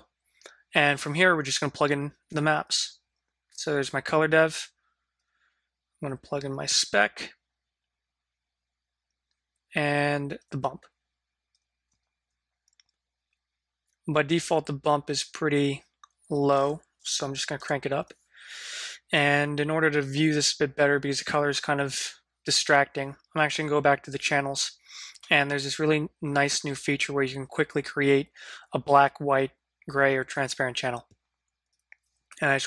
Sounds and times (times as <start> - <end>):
Speech: 0.7 - 4.8, 6.0 - 7.4, 9.7 - 11.0, 14.0 - 18.2, 19.0 - 31.2, 32.3 - 32.6.